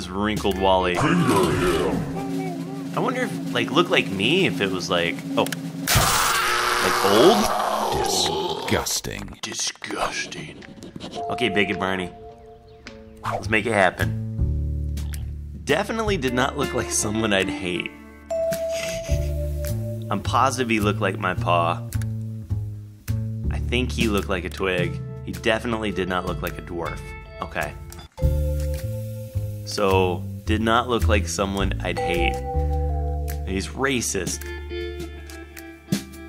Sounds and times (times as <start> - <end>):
Speech: 0.0 - 5.5, 6.8 - 10.6, 11.2 - 12.1, 13.3 - 14.2, 15.6 - 17.9, 20.1 - 21.8, 23.5 - 27.8, 29.7 - 32.4, 33.5 - 34.5
Music: 0.0 - 7.4, 11.2 - 36.2.